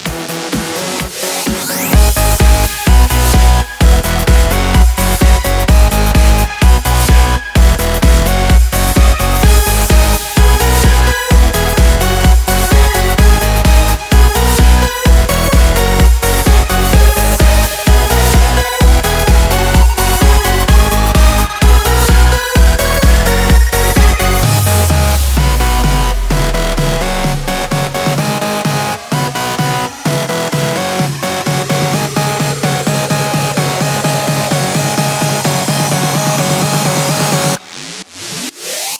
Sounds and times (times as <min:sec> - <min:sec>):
Electronic dance music: 0:00.0 - 0:38.9.